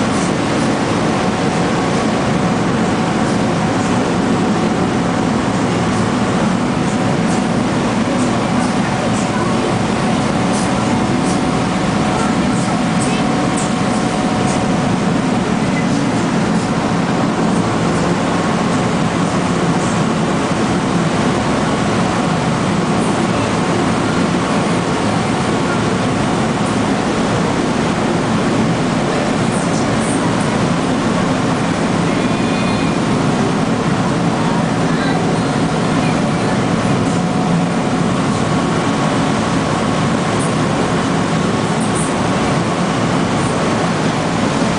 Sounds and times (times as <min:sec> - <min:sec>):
Boat, Water vehicle: 0:00.0 - 0:44.7
Speech: 0:08.0 - 0:14.6, 0:34.4 - 0:37.3.